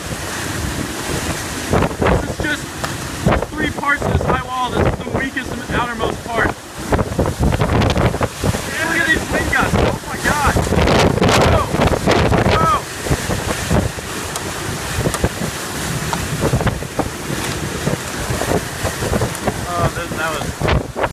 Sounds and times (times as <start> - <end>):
Speech: 3.5 - 6.6, 8.7 - 10.6, 12.5 - 12.8, 19.6 - 20.5.